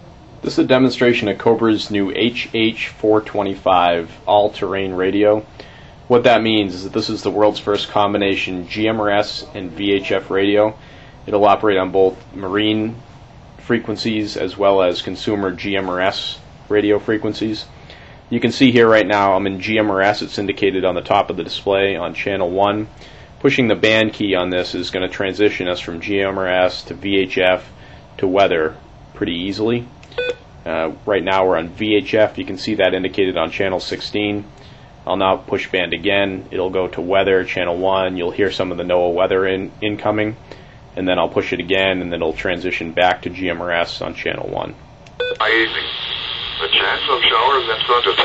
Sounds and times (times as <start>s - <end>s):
Speech: 0.4s - 5.5s, 6.1s - 13.0s, 13.6s - 17.7s, 18.3s - 29.9s, 30.7s - 34.5s, 35.1s - 40.4s, 41.0s - 44.8s, 45.4s - 46.0s, 46.6s - 48.2s
Radio: 45.4s - 48.2s.